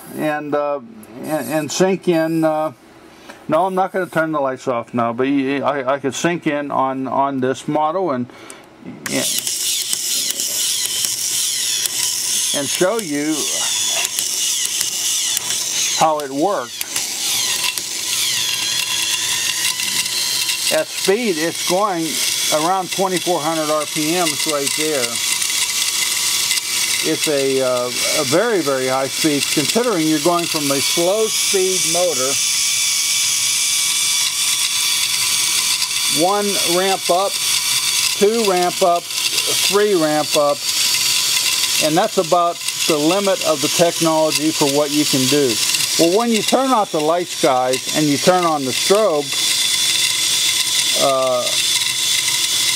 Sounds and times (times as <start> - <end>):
Gears: 9.1 - 52.7
Ratchet, pawl: 9.1 - 52.7.